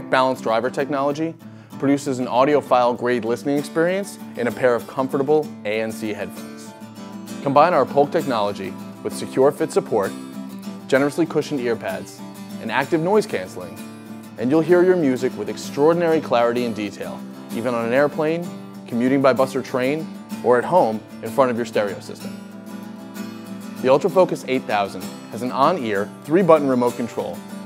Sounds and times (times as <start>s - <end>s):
Speech: 0.0s - 6.8s, 7.4s - 10.2s, 10.9s - 13.8s, 14.4s - 22.4s, 23.8s - 27.4s
Music: 0.0s - 27.6s.